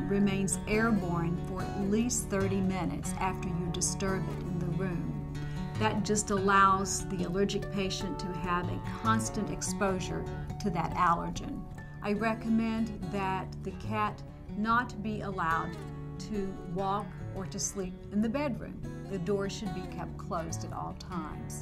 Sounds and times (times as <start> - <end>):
Speech: 0.0 - 5.2, 5.8 - 21.6
Music: 0.0 - 21.6.